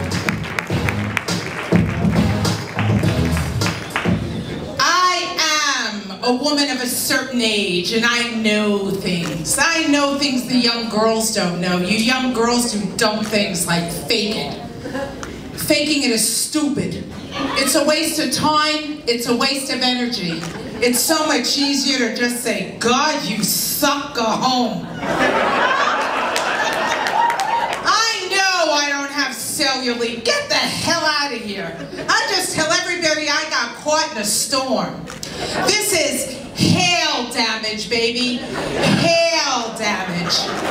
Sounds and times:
Music: 0:00.0 - 0:04.5.

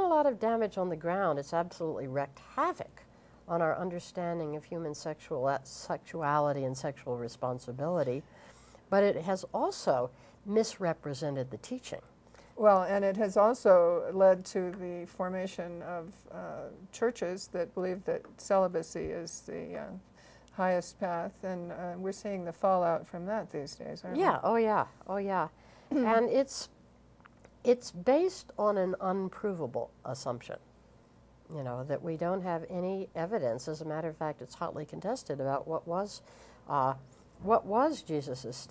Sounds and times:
Inside, small room: 0:00.0 - 0:38.7.

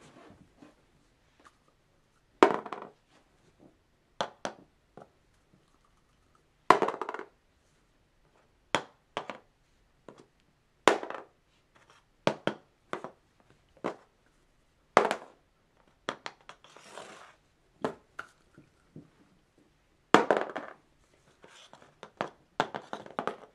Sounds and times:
Inside, small room: 0:00.0 - 0:23.5.

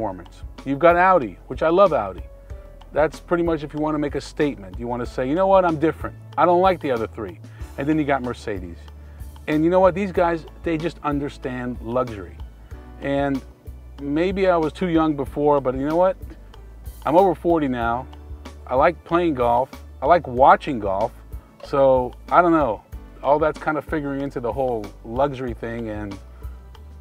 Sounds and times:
Speech: 0:00.0 - 0:02.2, 0:03.0 - 0:08.9, 0:09.5 - 0:12.4, 0:13.0 - 0:13.4, 0:14.0 - 0:16.2, 0:17.0 - 0:18.1, 0:18.7 - 0:26.2
Music: 0:00.0 - 0:27.0.

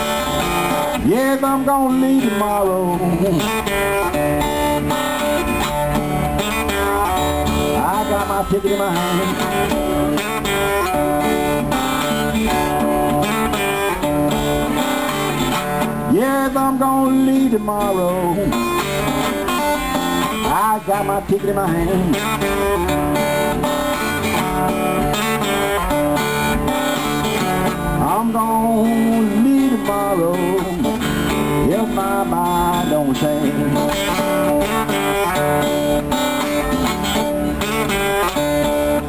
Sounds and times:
Music: 0:00.0 - 0:39.0.

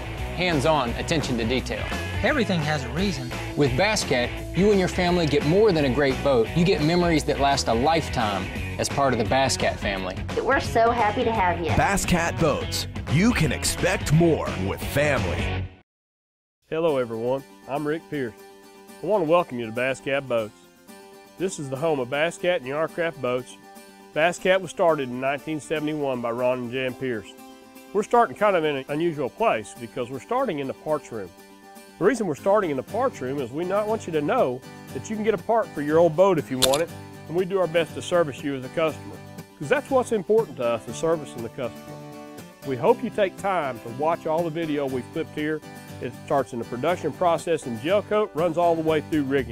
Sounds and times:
Music: 0:00.0 - 0:15.8, 0:16.6 - 0:49.5
Speech: 0:00.4 - 0:15.5, 0:16.7 - 0:18.4, 0:19.0 - 0:20.5, 0:21.4 - 0:23.6, 0:24.2 - 0:27.3, 0:28.0 - 0:31.3, 0:32.0 - 0:41.7, 0:42.6 - 0:49.5.

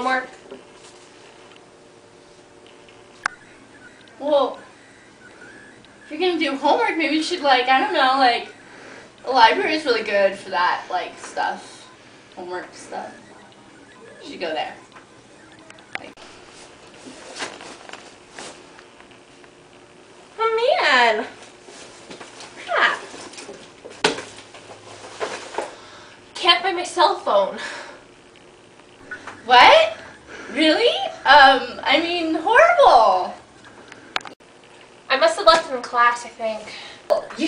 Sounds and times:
Speech: 0:00.0 - 0:00.4, 0:06.1 - 0:08.5, 0:09.2 - 0:13.2, 0:14.2 - 0:14.8, 0:20.4 - 0:21.4, 0:26.4 - 0:27.6, 0:29.4 - 0:33.4, 0:35.1 - 0:37.4
Inside, small room: 0:00.0 - 0:37.4.

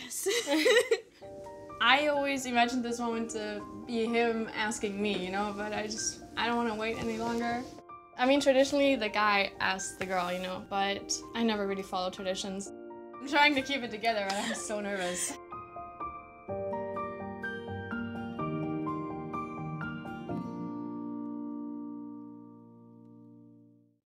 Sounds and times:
Music: 0:00.0 - 0:24.0.

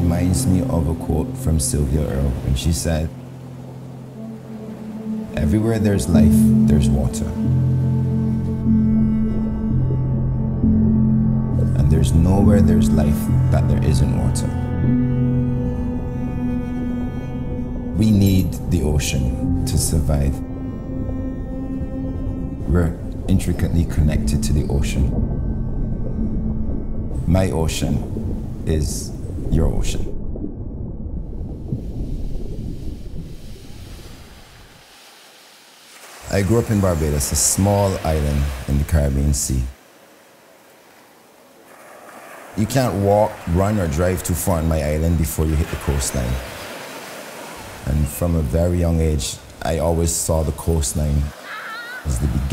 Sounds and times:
Speech: 0:00.0 - 0:03.1, 0:05.4 - 0:07.4, 0:11.6 - 0:14.6, 0:18.0 - 0:20.4, 0:22.7 - 0:25.1, 0:27.2 - 0:28.0, 0:28.7 - 0:30.1, 0:36.3 - 0:39.8, 0:42.6 - 0:46.4, 0:47.8 - 0:51.4, 0:52.0 - 0:52.5
Music: 0:00.0 - 0:30.0.

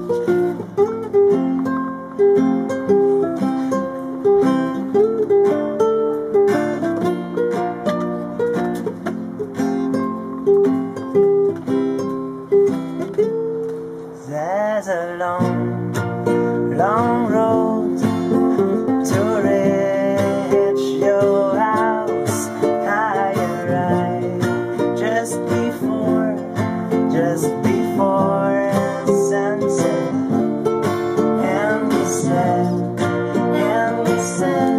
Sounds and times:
Acoustic guitar: 0:00.0 - 0:34.7.

